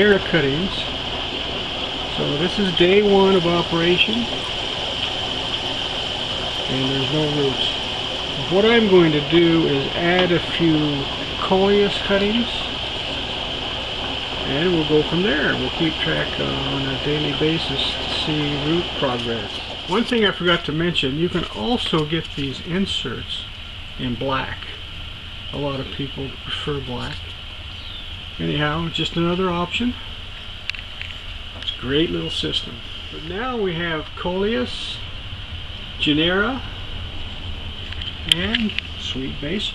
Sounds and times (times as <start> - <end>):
Speech: 0.0 - 0.9, 2.1 - 4.4, 6.7 - 7.8, 8.4 - 12.7, 14.4 - 24.8, 25.5 - 27.2, 28.4 - 30.1, 31.6 - 35.1, 36.0 - 36.7, 38.2 - 39.7.